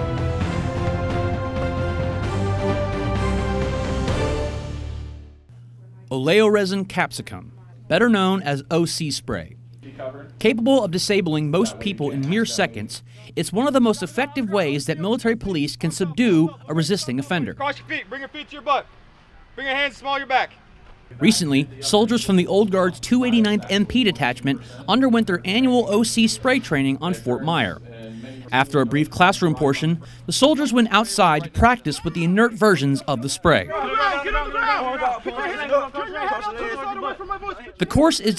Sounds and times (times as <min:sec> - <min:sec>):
Speech: 0:05.8 - 0:38.3.